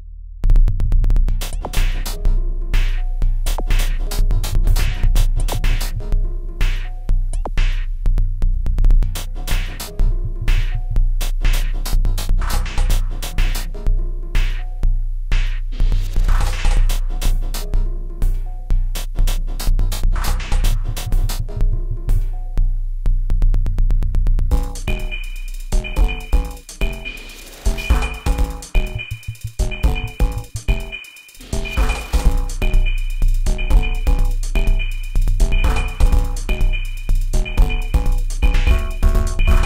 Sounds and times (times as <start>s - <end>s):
Techno: 1.2s - 8.2s, 9.0s - 22.4s, 24.5s - 39.6s.